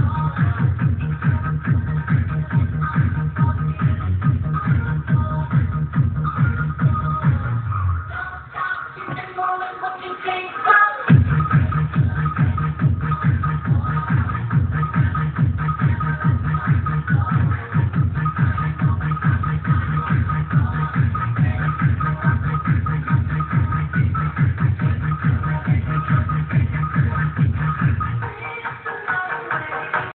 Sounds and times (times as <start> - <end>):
Disco: 0.0 - 30.1.